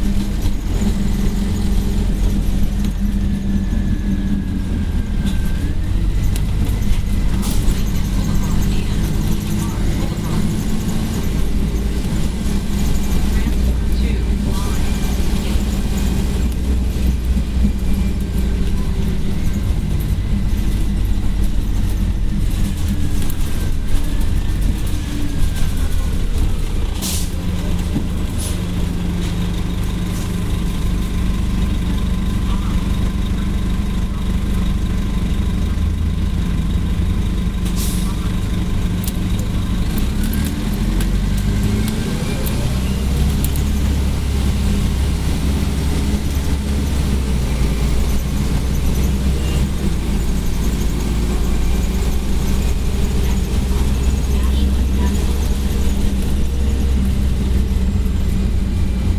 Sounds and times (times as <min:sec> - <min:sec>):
Bus: 0:00.0 - 0:59.1
Speech: 0:07.3 - 0:11.3, 0:13.2 - 0:15.6, 0:32.2 - 0:35.0, 0:37.8 - 0:39.9, 0:41.7 - 0:43.4, 0:53.1 - 0:56.0.